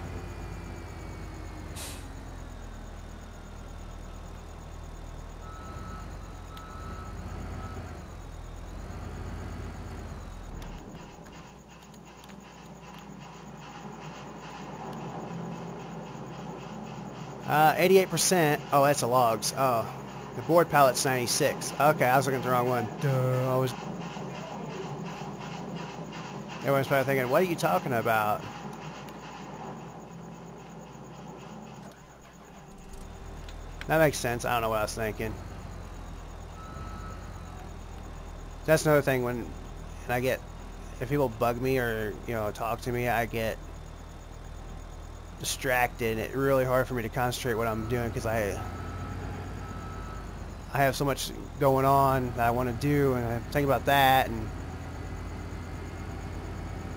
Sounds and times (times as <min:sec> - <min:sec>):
Vehicle: 0:00.0 - 0:56.9.